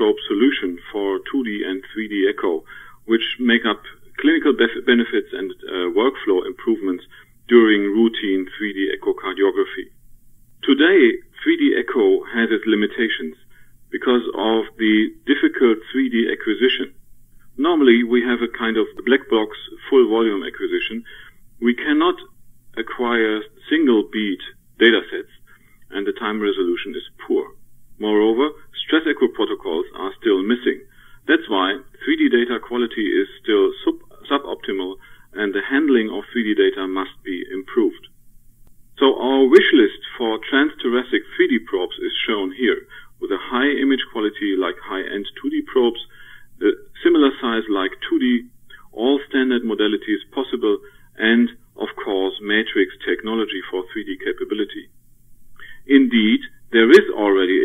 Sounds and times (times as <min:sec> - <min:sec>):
Speech: 0:00.0 - 0:10.0, 0:10.6 - 0:17.0, 0:17.6 - 0:38.1, 0:39.0 - 0:54.9, 0:55.8 - 0:57.6.